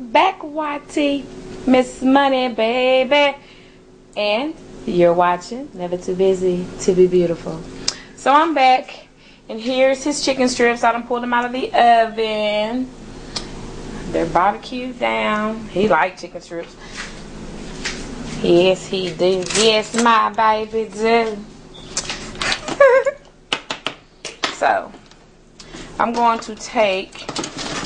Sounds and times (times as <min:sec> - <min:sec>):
Speech: 0:00.0 - 0:03.4, 0:04.2 - 0:12.9, 0:14.1 - 0:16.8, 0:18.4 - 0:21.5, 0:24.6 - 0:25.0, 0:26.0 - 0:27.2.